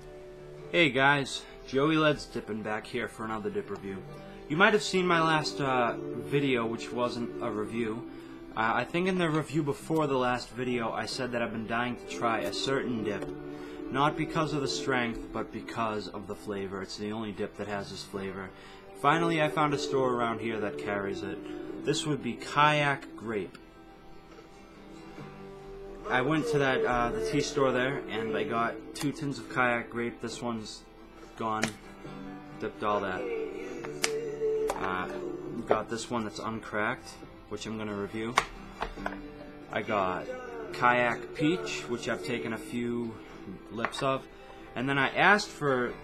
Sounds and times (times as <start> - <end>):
Music: 0.0 - 46.0
Speech: 0.7 - 13.2, 13.9 - 23.6, 26.1 - 30.8, 31.4 - 31.8, 32.6 - 33.3, 34.8 - 38.4, 39.7 - 44.2, 44.8 - 46.0.